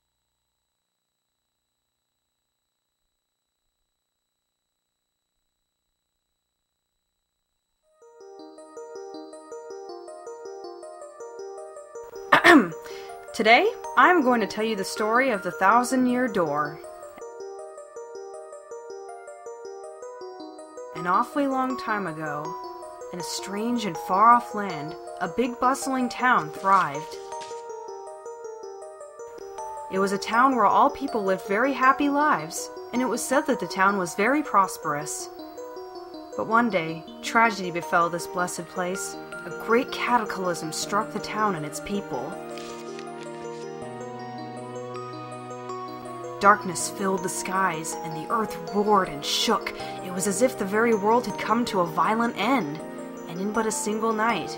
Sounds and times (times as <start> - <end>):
Music: 7.9 - 54.5
Speech: 13.4 - 16.8, 21.0 - 22.5, 23.2 - 27.2, 29.9 - 35.3, 36.4 - 42.4, 46.4 - 54.5.